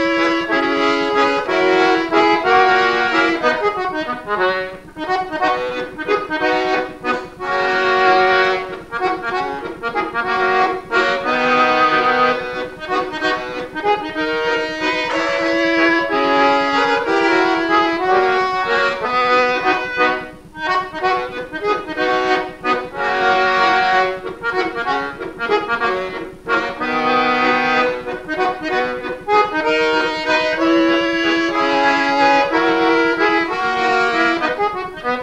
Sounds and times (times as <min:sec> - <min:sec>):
Accordion: 0:00.0 - 0:35.2.